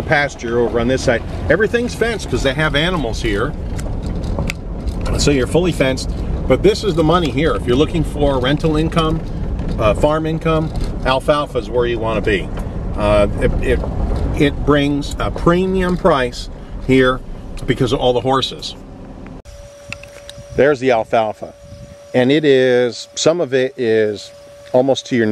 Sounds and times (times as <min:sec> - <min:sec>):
Speech: 0:00.0 - 0:03.6, 0:05.1 - 0:09.2, 0:09.8 - 0:13.8, 0:14.4 - 0:18.8, 0:20.6 - 0:21.6, 0:22.2 - 0:25.3.